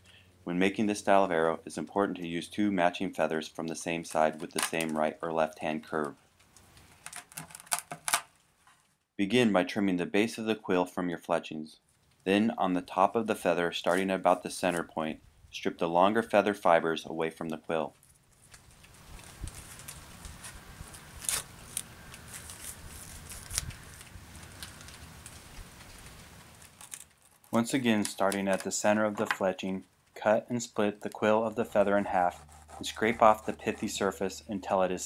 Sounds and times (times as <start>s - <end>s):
Speech: 0.5s - 6.2s, 9.2s - 18.0s, 27.6s - 35.0s.